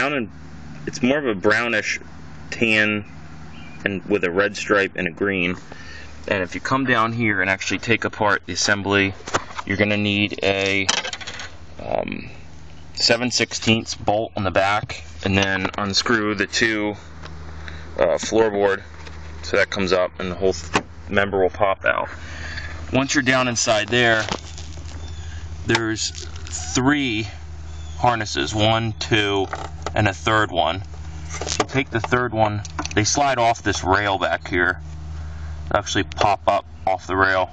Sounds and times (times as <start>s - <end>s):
Speech: 0.0s - 0.3s, 0.9s - 3.1s, 3.8s - 5.7s, 6.3s - 11.0s, 11.8s - 12.4s, 13.0s - 17.0s, 18.0s - 22.2s, 22.9s - 24.4s, 25.6s - 27.4s, 28.0s - 30.9s, 31.6s - 34.8s, 35.7s - 37.5s.